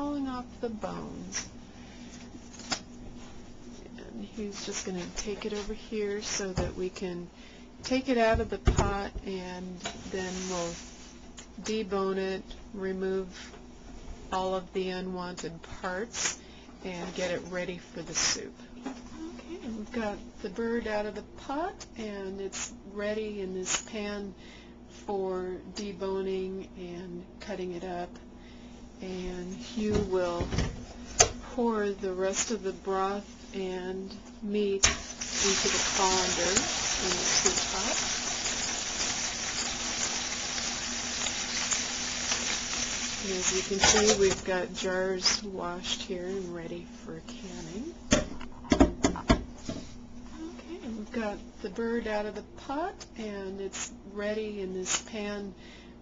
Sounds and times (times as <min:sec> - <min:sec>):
Speech: 0:00.0 - 0:01.5, 0:03.8 - 0:10.8, 0:11.6 - 0:13.4, 0:14.3 - 0:24.4, 0:25.0 - 0:28.2, 0:29.0 - 0:30.6, 0:31.5 - 0:38.0, 0:43.2 - 0:48.0, 0:50.3 - 0:55.6.